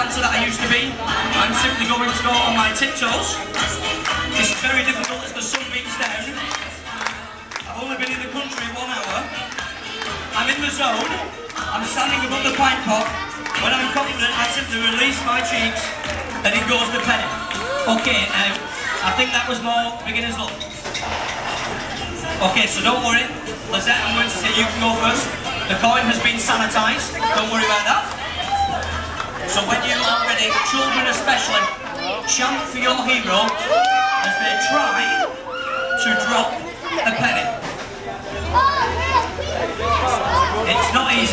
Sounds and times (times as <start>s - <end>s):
Male speech, man speaking: 0.0s - 3.4s, 4.4s - 6.6s, 7.7s - 9.4s, 10.3s - 20.7s, 22.3s - 28.8s, 29.4s - 35.3s, 35.9s - 38.6s, 39.8s - 41.3s.